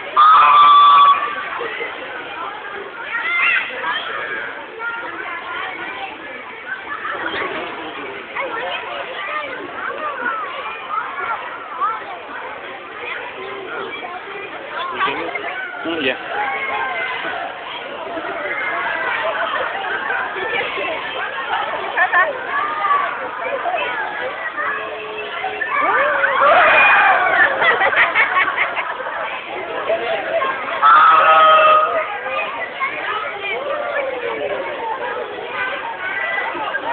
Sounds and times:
Speech: 0.0 - 36.9.

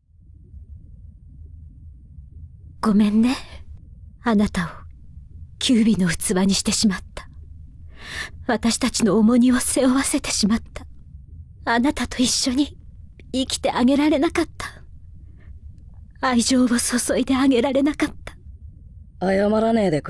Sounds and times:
Speech: 2.8 - 3.6, 4.3 - 4.8, 5.6 - 7.3, 8.5 - 10.8, 11.7 - 14.8, 16.2 - 18.3, 19.2 - 20.0.

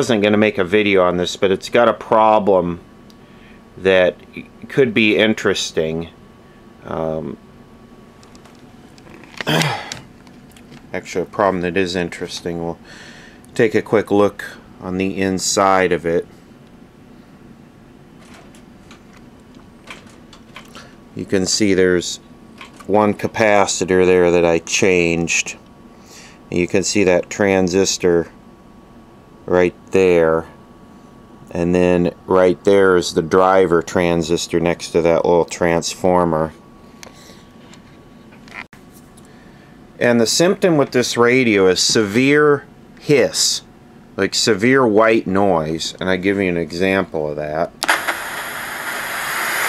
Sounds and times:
Speech: 0.0 - 2.8, 3.8 - 6.2, 6.8 - 7.4, 10.9 - 12.8, 13.6 - 16.3, 21.2 - 22.2, 22.9 - 25.6, 26.5 - 28.4, 29.5 - 30.6, 31.5 - 36.6, 40.0 - 47.8.

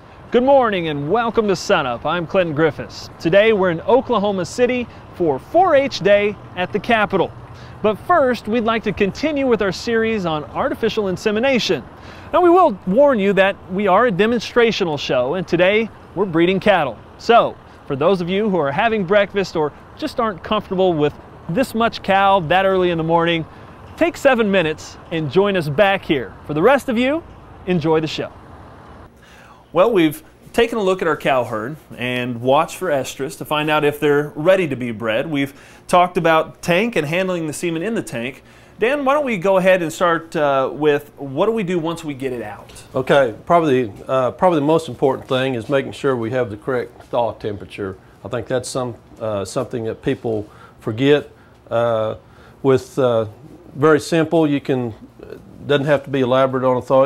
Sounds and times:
Speech: 0.3 - 28.4, 29.7 - 57.0.

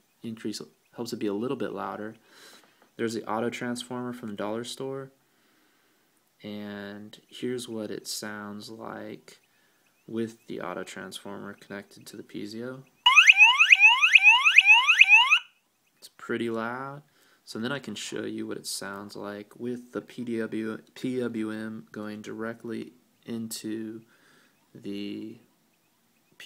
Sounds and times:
Speech: 0.2 - 2.2, 3.0 - 5.2, 6.4 - 9.4, 10.1 - 12.9, 16.0 - 24.1, 24.7 - 25.5
Fire alarm: 13.1 - 15.5.

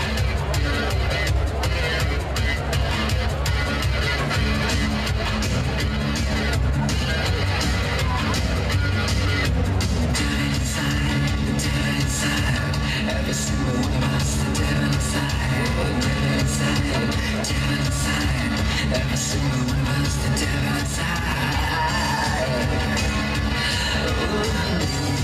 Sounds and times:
Music: 0.0 - 25.2.

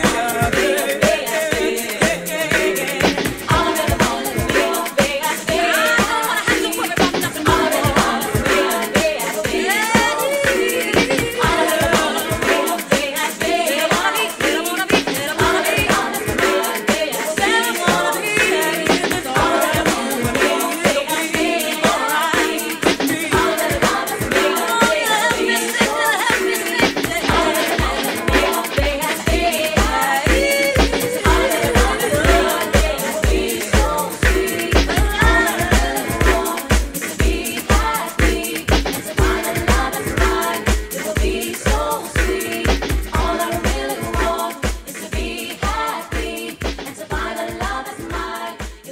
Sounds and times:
Pop music: 0.0 - 48.9.

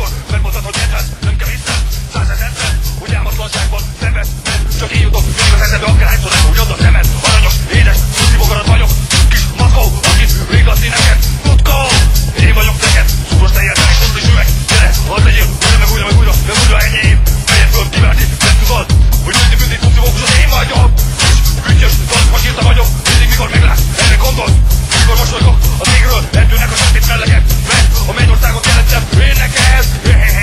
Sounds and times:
Music: 0.0 - 30.4.

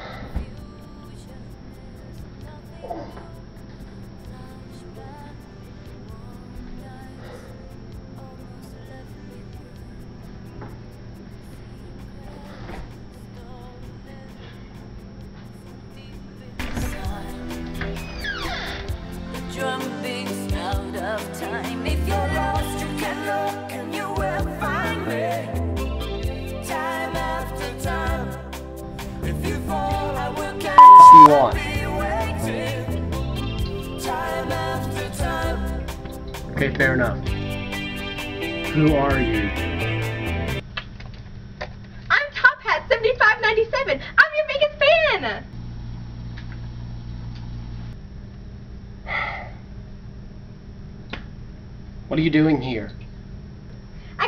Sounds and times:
Music: 0.0 - 40.6
Speech: 36.6 - 37.2, 38.8 - 39.5, 42.1 - 45.5.

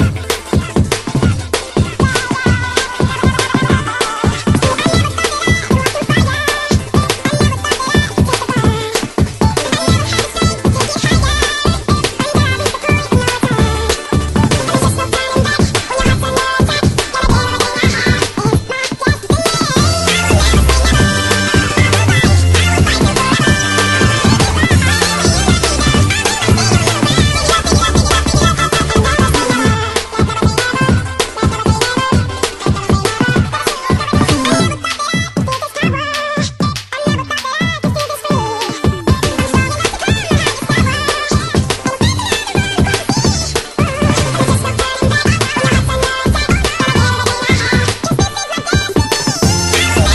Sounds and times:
Music: 0.0 - 50.1.

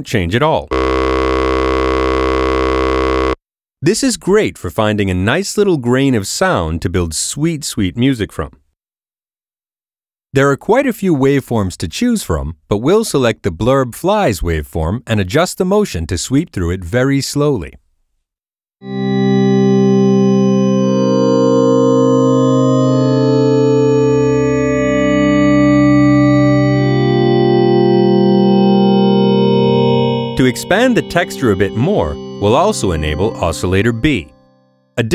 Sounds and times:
Speech: 0.0 - 0.7, 3.8 - 8.6, 10.4 - 17.8, 30.4 - 34.3
Synthesizer: 18.9 - 34.6.

